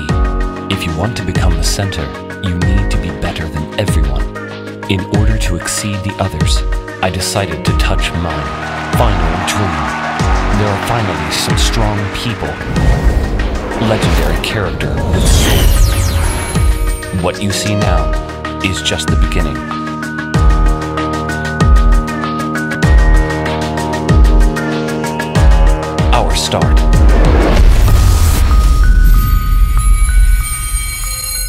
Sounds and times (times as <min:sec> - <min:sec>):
Soundtrack music: 0:06.6 - 0:31.4.